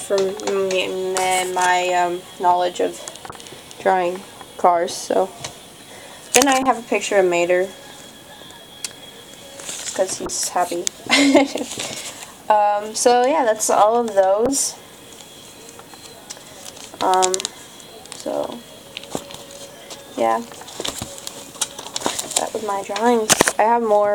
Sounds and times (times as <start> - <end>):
Speech: 0.0 - 3.1, 3.8 - 5.4, 6.4 - 7.8, 10.0 - 11.6, 12.5 - 14.8, 17.0 - 18.7, 20.0 - 20.5, 22.4 - 24.1.